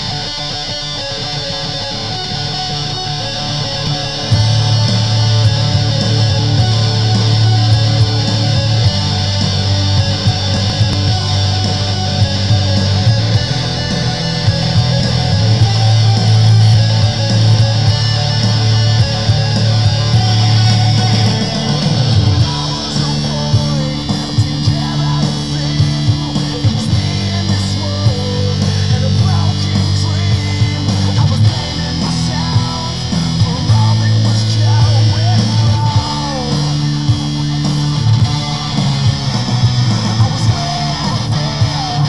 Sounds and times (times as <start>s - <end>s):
Strum: 0.0s - 42.0s.